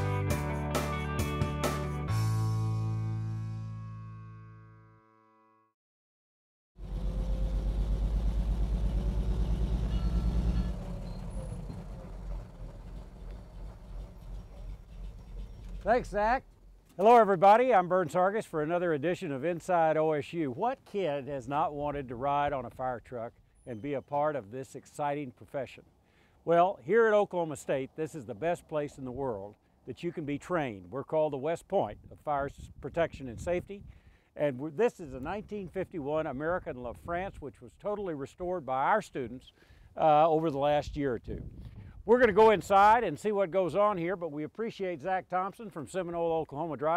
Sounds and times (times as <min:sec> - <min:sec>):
Speech: 0:15.8 - 0:25.8, 0:26.5 - 0:33.8, 0:34.4 - 0:41.4, 0:42.1 - 0:46.9.